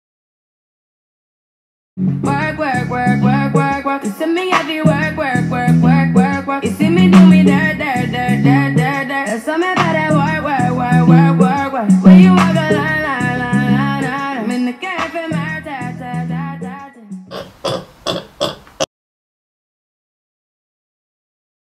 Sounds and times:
Music: 2.0 - 17.3
Oink: 17.3 - 18.9.

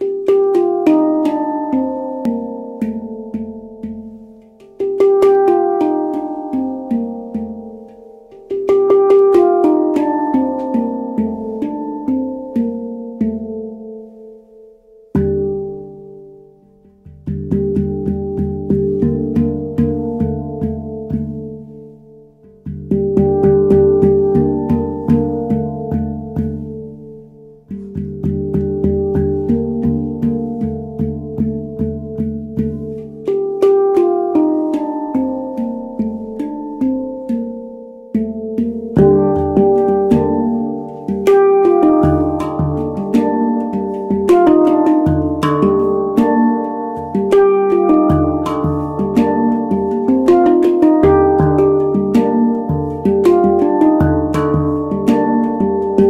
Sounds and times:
Music: 0.0 - 56.1.

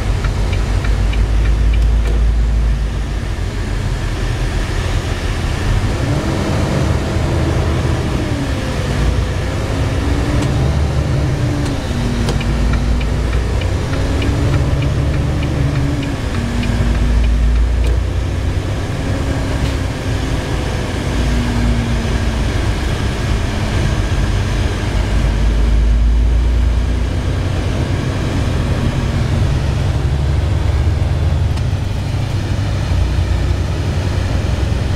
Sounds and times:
Truck: 0.0 - 34.9.

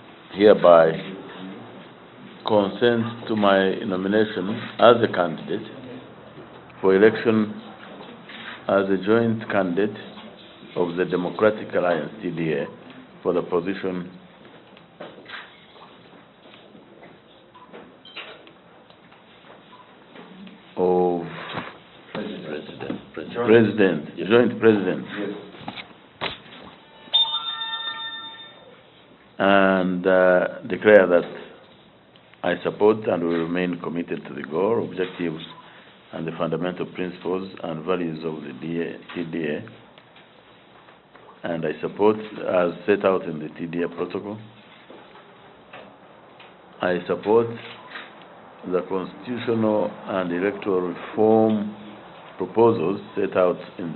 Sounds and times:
Inside, large room or hall: 0.0 - 53.9
Speech: 0.3 - 14.2, 20.8 - 21.5, 22.1 - 25.6, 29.4 - 31.6, 32.4 - 39.8, 41.4 - 44.6, 46.8 - 47.8, 48.6 - 53.9.

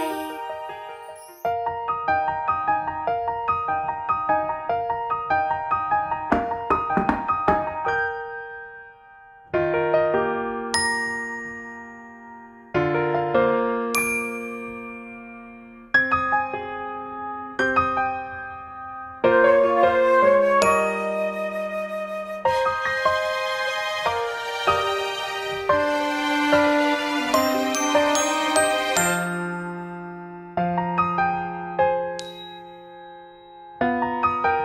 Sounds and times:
Music: 0.0 - 34.6.

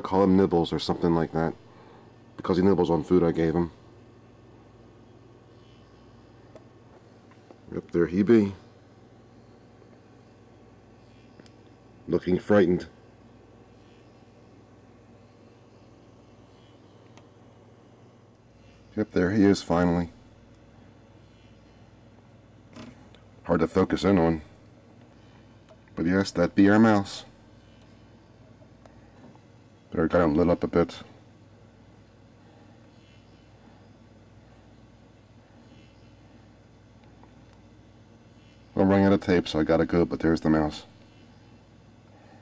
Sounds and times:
Speech: 0.0 - 1.6, 2.4 - 3.8, 7.7 - 8.7, 12.0 - 13.0, 18.9 - 20.2, 23.4 - 24.6, 26.0 - 27.4, 29.9 - 31.2, 38.7 - 41.0.

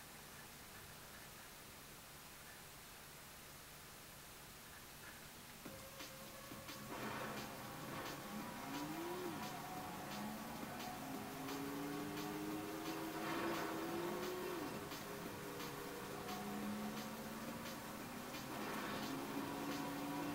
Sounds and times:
Music: 5.6 - 20.3
Car: 5.7 - 20.3.

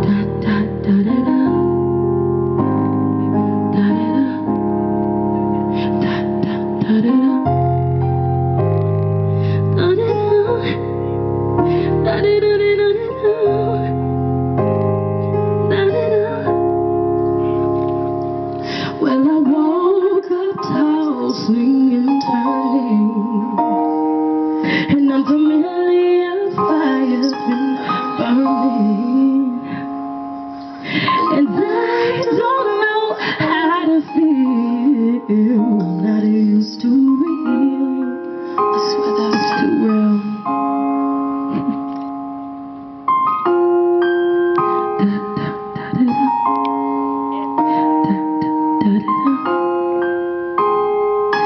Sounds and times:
Music: 0.0 - 51.4.

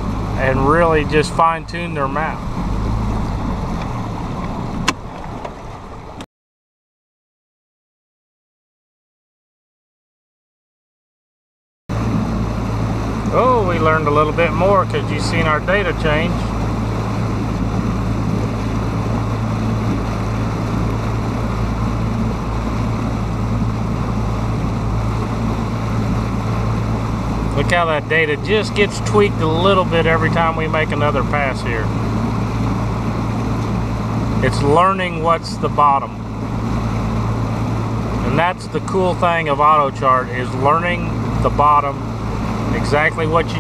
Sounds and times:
Outside, rural or natural: 0.0 - 6.3, 11.9 - 43.6
Ship: 0.0 - 6.3, 11.9 - 43.6
Speech: 0.4 - 2.4, 13.3 - 16.5, 27.6 - 31.9, 34.4 - 36.2, 38.2 - 42.0, 42.7 - 43.6.

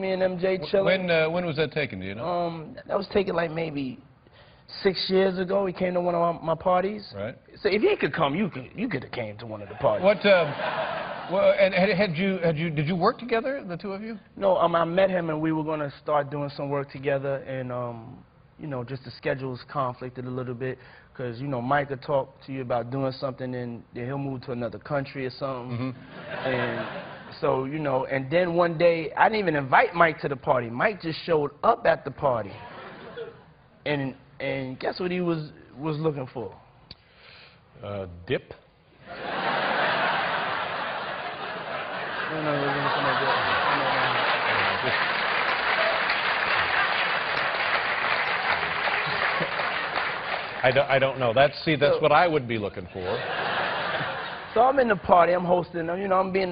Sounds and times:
Speech: 0.0 - 4.0, 4.7 - 10.5, 11.3 - 32.6, 33.8 - 36.6, 50.6 - 53.2, 54.6 - 56.5.

